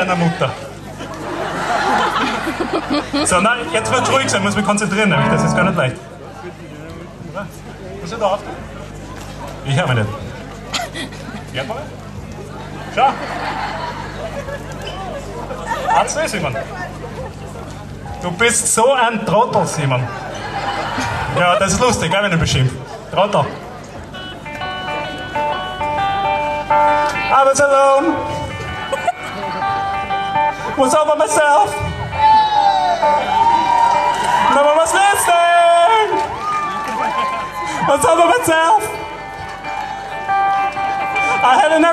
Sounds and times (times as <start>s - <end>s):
Guitar: 2.7s - 7.7s, 16.6s - 41.9s.